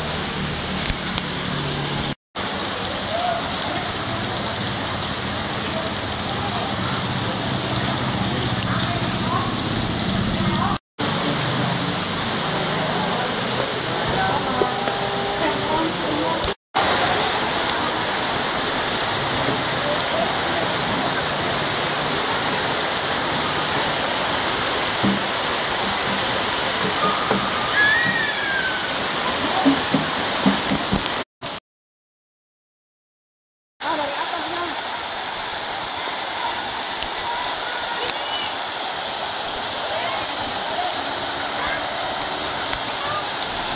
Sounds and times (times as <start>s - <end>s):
Waterfall: 0.0s - 31.6s, 33.8s - 43.7s.